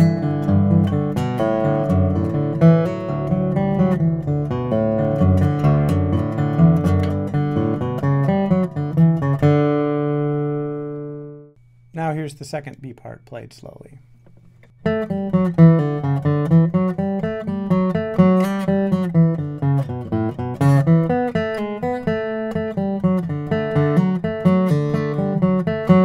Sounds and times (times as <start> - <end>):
Acoustic guitar: 0.0 - 12.8, 14.3 - 26.0
Inside, small room: 0.0 - 26.0
Speech: 12.0 - 14.0.